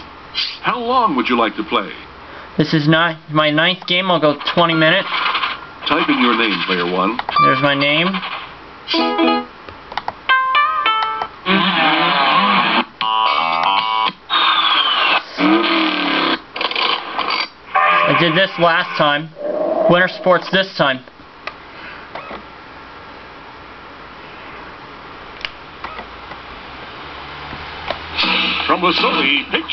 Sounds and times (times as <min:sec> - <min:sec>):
Speech: 0:00.6 - 0:05.1, 0:05.9 - 0:08.2, 0:18.0 - 0:21.1, 0:28.7 - 0:29.7
Music: 0:09.0 - 0:09.5, 0:10.3 - 0:14.2.